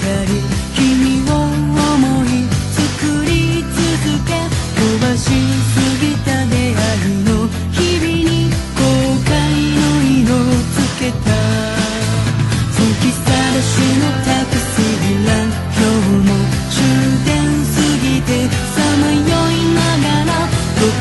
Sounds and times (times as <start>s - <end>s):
Music: 0.0s - 21.0s.